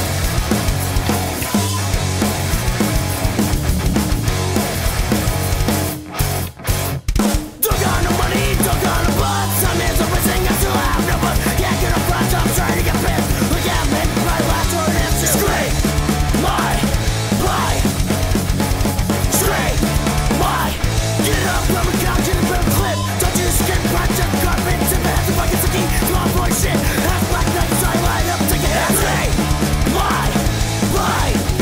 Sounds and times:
Music: 0:00.0 - 0:31.6.

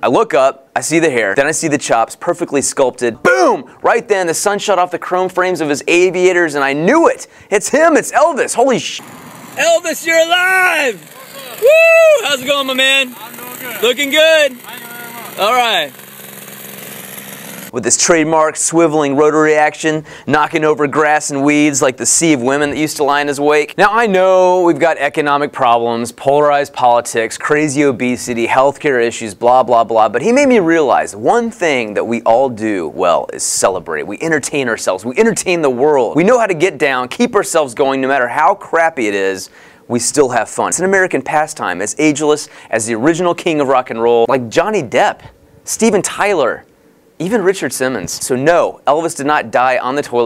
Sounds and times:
Speech: 0:00.0 - 0:09.0, 0:09.6 - 0:15.9, 0:17.7 - 0:50.2.

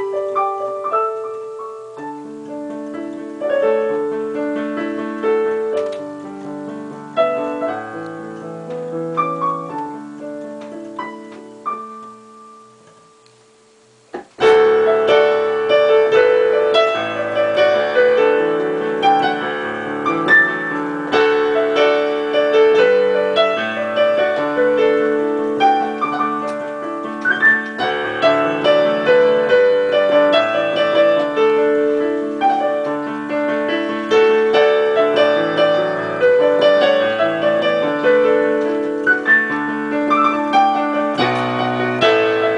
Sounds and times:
Music: 0:00.0 - 0:42.5.

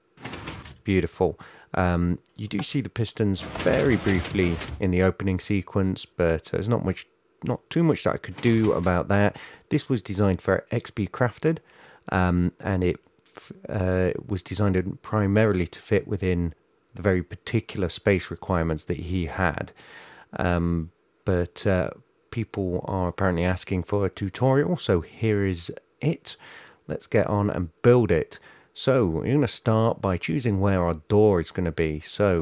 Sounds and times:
Door: 0:00.2 - 0:00.9, 0:03.4 - 0:04.9, 0:08.3 - 0:09.0
Speech: 0:00.3 - 0:32.4.

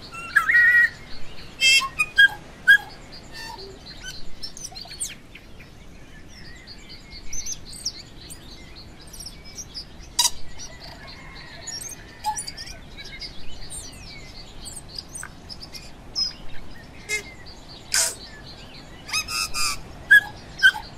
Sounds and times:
Chirp, tweet: 0:00.0 - 0:20.9.

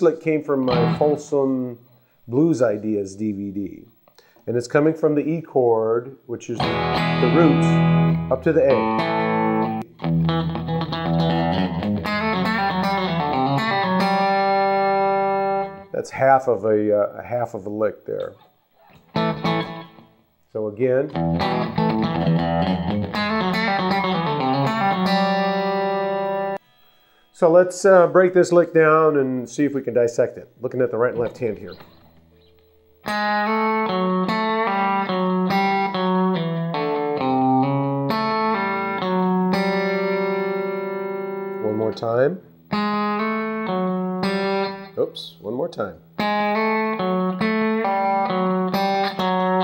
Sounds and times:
Country: 0:00.0 - 0:01.8, 0:04.5 - 0:20.0, 0:27.3 - 0:49.6
Speech: 0:00.0 - 0:03.9, 0:04.5 - 0:09.0, 0:15.9 - 0:18.4, 0:20.6 - 0:21.2, 0:27.4 - 0:31.8, 0:41.6 - 0:42.4, 0:45.0 - 0:46.0
Electric guitar: 0:00.6 - 0:01.3, 0:06.6 - 0:15.9, 0:18.8 - 0:20.2, 0:21.1 - 0:27.3, 0:31.2 - 0:42.0, 0:42.7 - 0:45.0, 0:46.0 - 0:49.6.

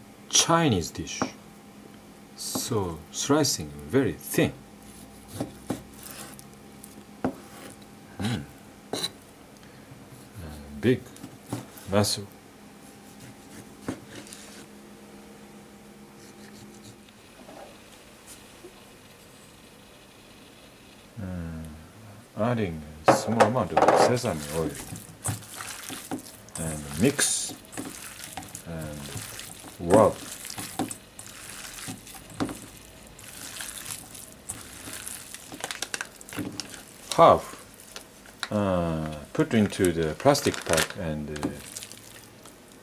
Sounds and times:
Speech: 0:00.3 - 0:01.4, 0:02.4 - 0:04.6, 0:10.4 - 0:11.1, 0:11.9 - 0:12.3, 0:22.4 - 0:24.8, 0:26.6 - 0:27.6, 0:28.6 - 0:29.2, 0:29.8 - 0:30.2, 0:37.1 - 0:37.6, 0:38.5 - 0:41.6.

